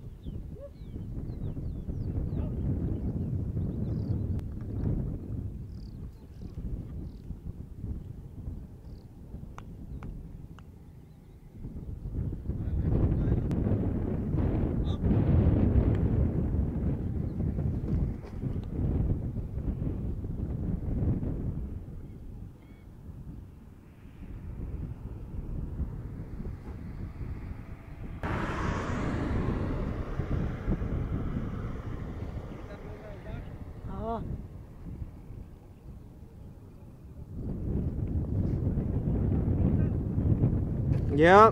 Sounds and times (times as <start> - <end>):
Speech: 32.6 - 34.3, 41.1 - 41.5.